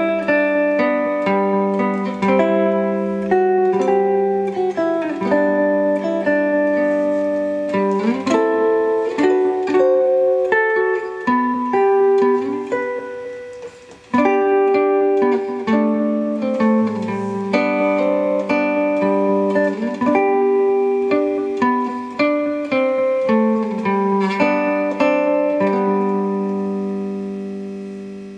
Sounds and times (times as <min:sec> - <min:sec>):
Guitar: 0:00.0 - 0:28.3.